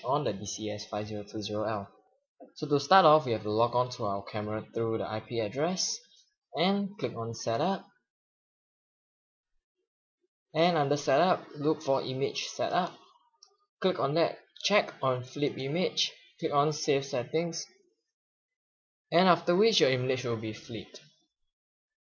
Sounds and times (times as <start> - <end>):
Speech: 0.0 - 8.0, 10.6 - 13.2, 13.8 - 17.8, 19.1 - 21.1.